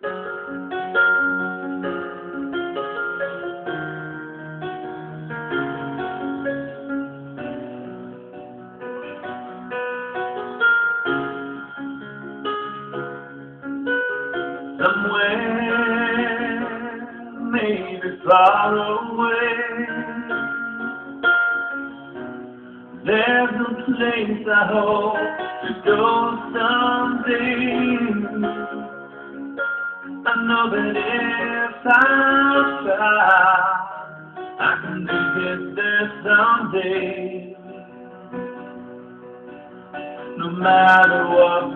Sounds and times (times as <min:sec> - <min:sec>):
Music: 0:00.0 - 0:41.7.